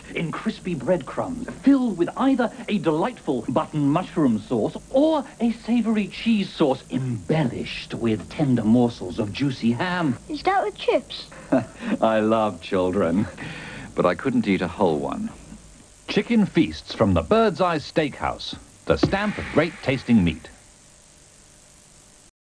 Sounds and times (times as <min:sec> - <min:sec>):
Speech: 0:00.0 - 0:11.3, 0:12.0 - 0:13.4, 0:14.0 - 0:15.4, 0:16.1 - 0:20.6.